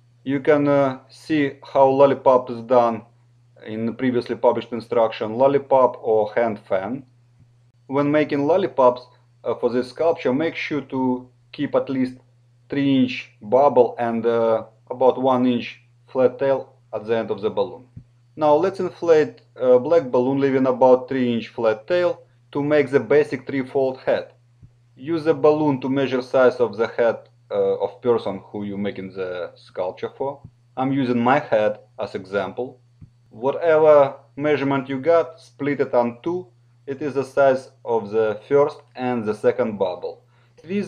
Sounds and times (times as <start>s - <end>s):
Speech: 0.3s - 7.1s, 7.9s - 24.4s, 25.0s - 40.8s.